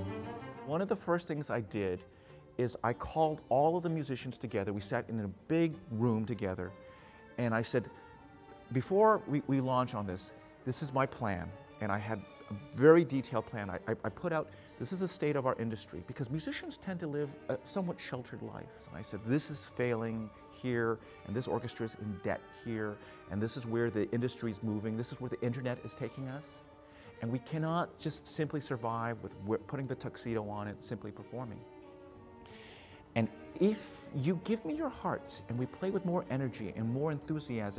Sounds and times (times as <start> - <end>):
Speech: 0.0 - 2.0, 2.6 - 6.7, 7.4 - 7.9, 8.7 - 26.6, 27.2 - 31.6, 33.2 - 37.7
Classical music: 0.0 - 37.7
Orchestra: 0.0 - 37.7.